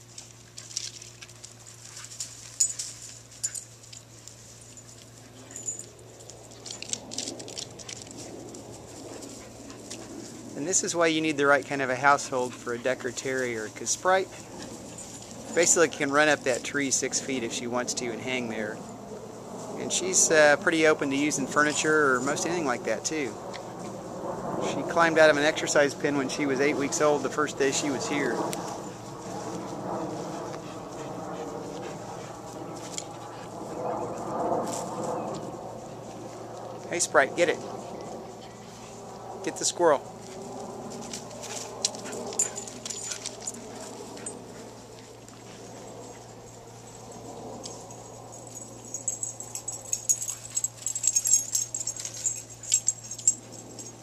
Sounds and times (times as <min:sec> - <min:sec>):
Speech: 0:10.6 - 0:14.4, 0:15.6 - 0:18.8, 0:19.8 - 0:23.4, 0:24.6 - 0:28.4, 0:36.9 - 0:37.6, 0:39.4 - 0:40.0.